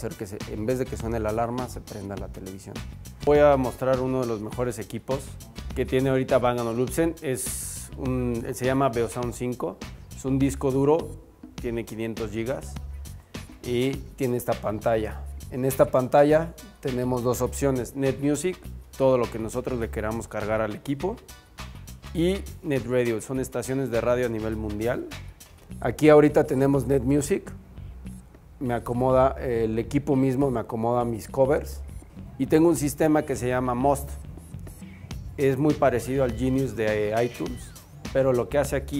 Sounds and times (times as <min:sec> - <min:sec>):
Speech: 0:00.0 - 0:12.8, 0:13.6 - 0:21.2, 0:22.1 - 0:25.2, 0:25.8 - 0:27.5, 0:28.6 - 0:34.2, 0:35.4 - 0:38.9
Music: 0:00.0 - 0:38.9.